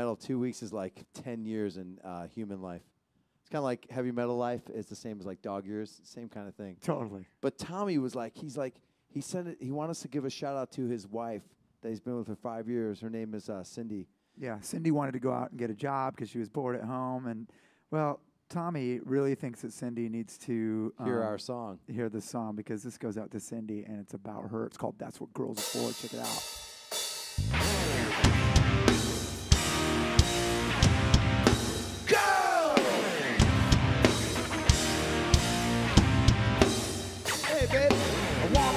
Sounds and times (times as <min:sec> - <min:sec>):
Speech: 0:00.0 - 0:02.9, 0:03.5 - 0:26.5, 0:37.4 - 0:38.7.